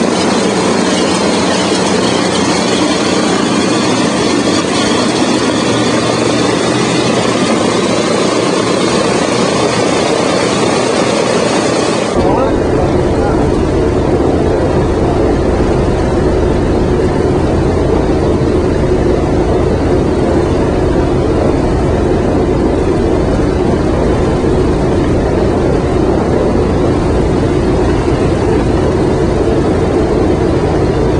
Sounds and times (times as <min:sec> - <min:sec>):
Outside, urban or manmade: 0:00.0 - 0:31.2
Propeller, airscrew: 0:00.0 - 0:31.2.